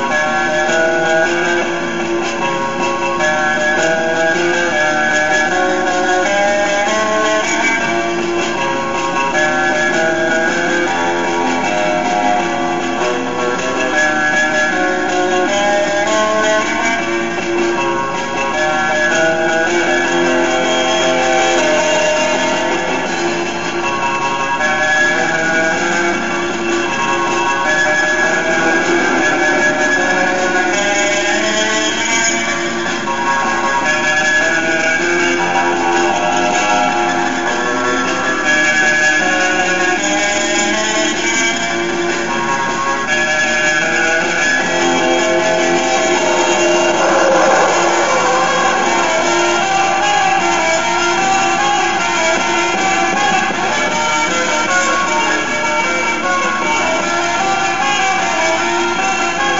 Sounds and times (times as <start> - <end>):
Music: 0.0 - 59.5.